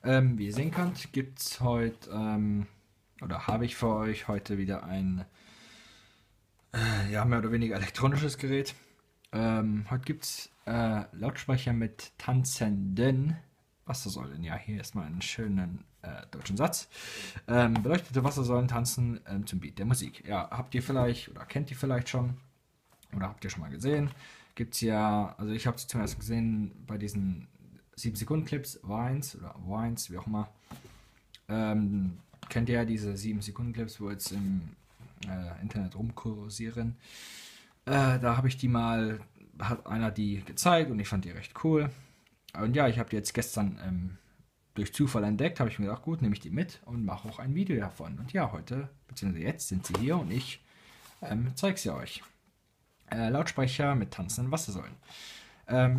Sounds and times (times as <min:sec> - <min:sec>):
Speech: 0:00.0 - 0:05.3, 0:06.8 - 0:22.4, 0:23.0 - 0:30.6, 0:31.4 - 0:37.0, 0:37.8 - 0:50.6, 0:51.2 - 0:52.4, 0:53.0 - 0:55.0, 0:55.7 - 0:55.9.